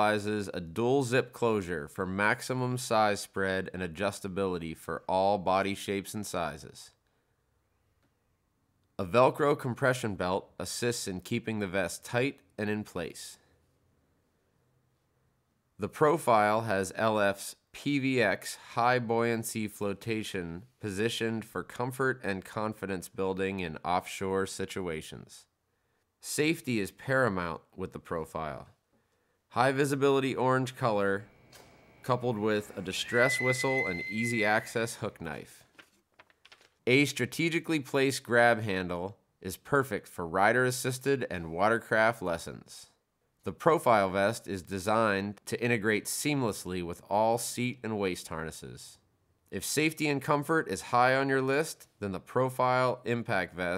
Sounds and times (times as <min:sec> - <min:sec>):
Speech: 0:00.0 - 0:07.0, 0:09.0 - 0:13.5, 0:15.8 - 0:25.5, 0:26.2 - 0:28.8, 0:29.5 - 0:31.3, 0:32.1 - 0:35.7, 0:36.9 - 0:53.7.